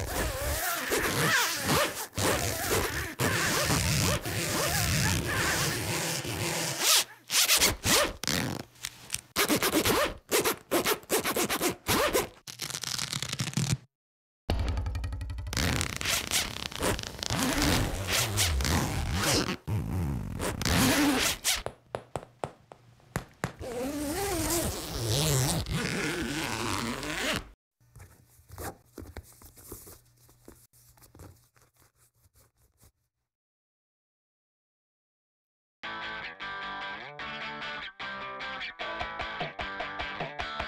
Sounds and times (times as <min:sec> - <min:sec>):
Zipper (clothing): 0:00.0 - 0:08.7, 0:09.4 - 0:13.8, 0:15.6 - 0:21.6, 0:23.6 - 0:27.6.